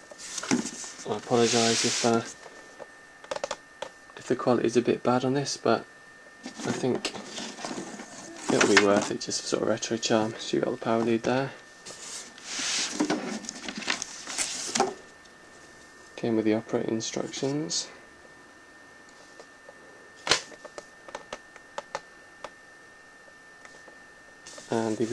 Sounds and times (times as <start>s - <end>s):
Speech: 1.1s - 2.3s, 4.2s - 5.9s, 6.6s - 7.1s, 8.5s - 11.6s, 16.2s - 18.0s, 24.7s - 25.1s.